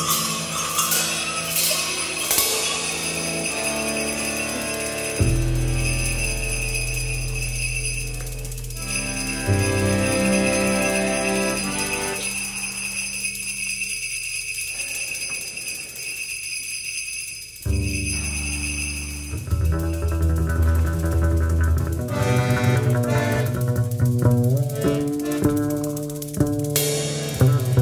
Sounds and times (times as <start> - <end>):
Jingle bell: 0.0 - 27.8.